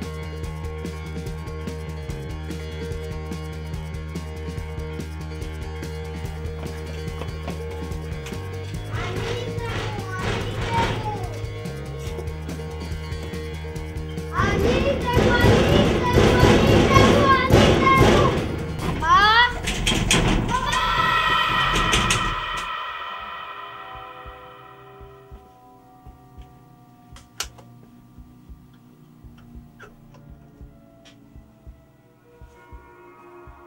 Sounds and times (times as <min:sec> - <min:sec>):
Music: 0:00.0 - 0:33.6.